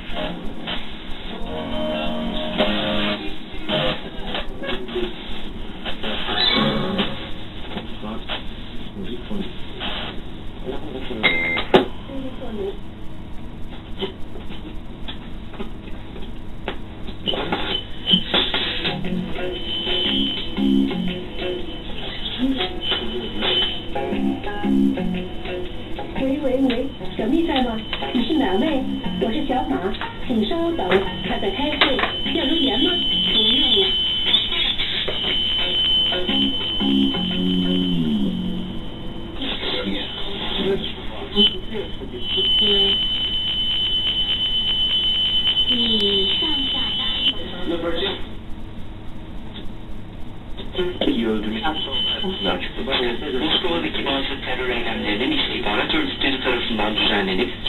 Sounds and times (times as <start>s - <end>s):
Music: 0.0s - 4.6s, 6.0s - 7.4s, 18.1s - 29.9s, 32.1s - 40.3s
Radio: 0.0s - 11.4s, 16.7s - 20.5s, 21.8s - 24.6s, 25.9s - 36.9s, 39.3s - 44.4s, 45.5s - 48.3s, 50.5s - 57.6s.